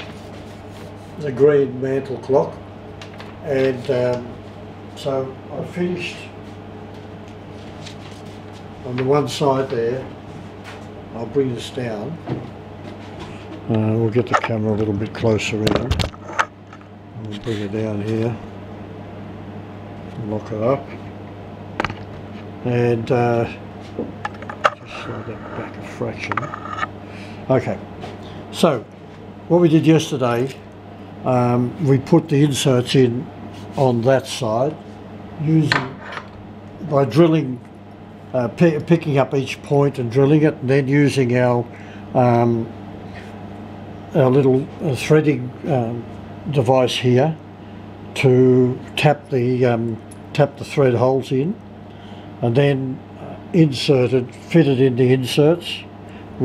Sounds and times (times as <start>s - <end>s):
Speech: 1.2s - 2.6s, 3.4s - 4.4s, 5.0s - 6.4s, 8.8s - 10.1s, 11.1s - 12.3s, 13.7s - 16.0s, 17.2s - 18.4s, 20.2s - 21.0s, 22.6s - 23.6s, 24.8s - 26.5s, 27.5s - 27.9s, 28.5s - 28.9s, 29.5s - 30.6s, 31.2s - 34.8s, 35.4s - 36.0s, 36.8s - 37.6s, 38.3s - 42.7s, 44.1s - 47.4s, 48.2s - 51.6s, 52.4s - 56.4s.